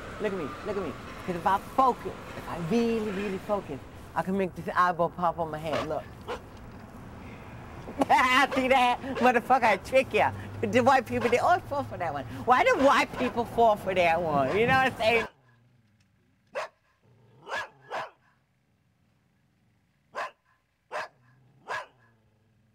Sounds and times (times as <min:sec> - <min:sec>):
Speech: 0:00.2 - 0:06.1, 0:08.0 - 0:15.3.